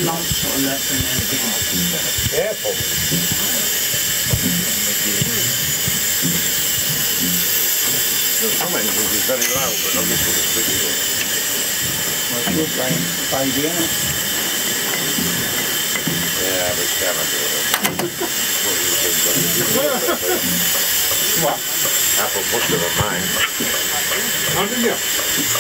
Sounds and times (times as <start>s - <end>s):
Speech: 0.0s - 3.8s, 4.4s - 5.6s, 7.9s - 11.2s, 12.3s - 14.0s, 16.4s - 20.4s, 21.3s - 25.6s
Steam: 0.0s - 25.6s.